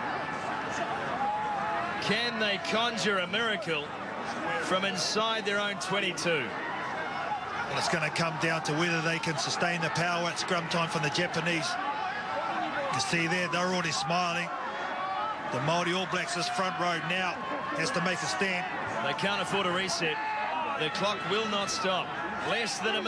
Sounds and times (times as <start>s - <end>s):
Speech: 2.0s - 3.9s, 4.5s - 6.5s, 7.7s - 11.8s, 12.8s - 14.5s, 15.5s - 20.2s, 20.8s - 23.0s.